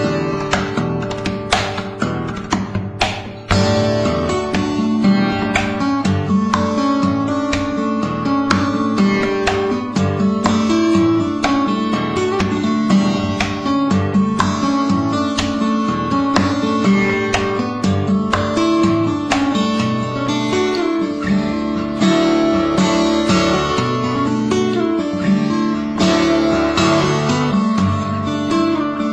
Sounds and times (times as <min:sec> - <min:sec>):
Strum: 0:00.0 - 0:29.1.